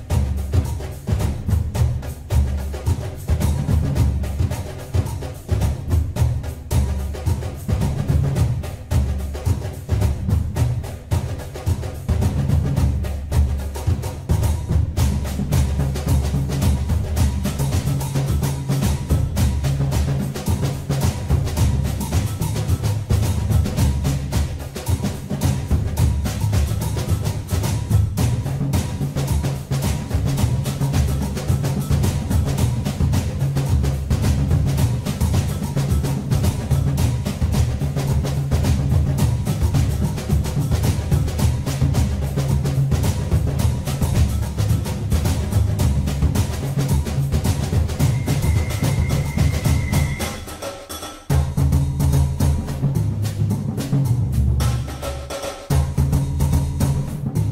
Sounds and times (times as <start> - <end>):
Music: 0.0 - 57.5.